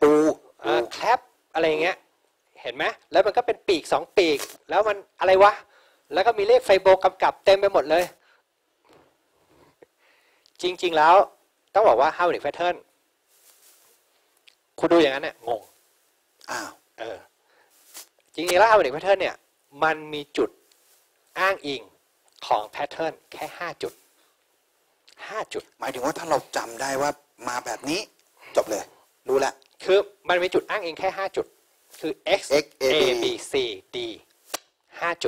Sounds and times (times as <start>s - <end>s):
Speech: 0.0s - 2.0s, 2.6s - 8.2s, 10.6s - 12.9s, 14.8s - 15.7s, 16.5s - 17.3s, 18.4s - 20.6s, 21.4s - 24.0s, 25.2s - 34.3s, 34.9s - 35.2s.